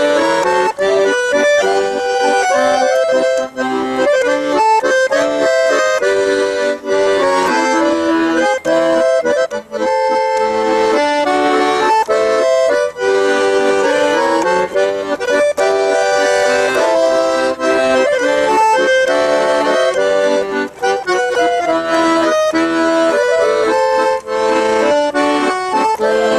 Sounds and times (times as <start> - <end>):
Accordion: 0.0 - 26.3.